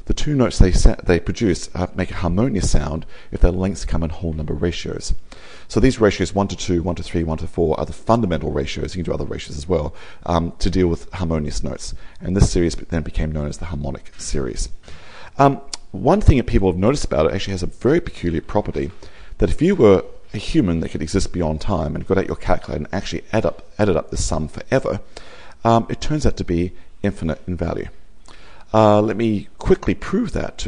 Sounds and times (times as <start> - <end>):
Speech: 0.0 - 14.8, 15.4 - 28.0, 28.7 - 30.6.